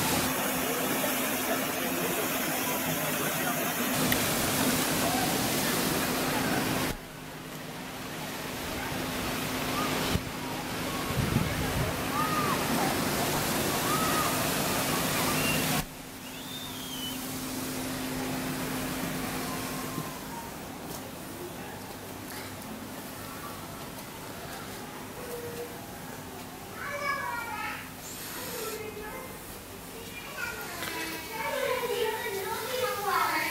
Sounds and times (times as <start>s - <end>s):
Water: 0.0s - 33.5s.